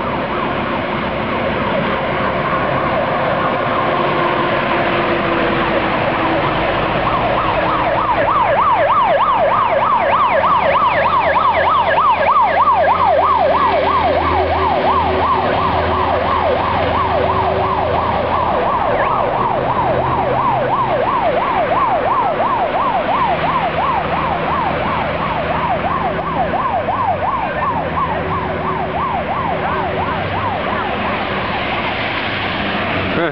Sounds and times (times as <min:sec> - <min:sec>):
Fire engine, fire truck (siren): 0:00.0 - 0:33.3
Truck: 0:00.0 - 0:33.3.